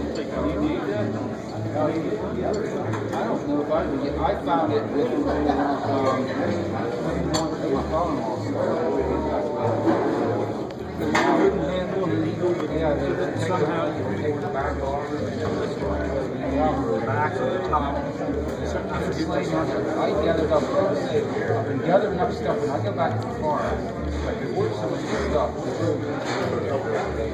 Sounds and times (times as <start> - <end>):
Speech: 0.0 - 27.3.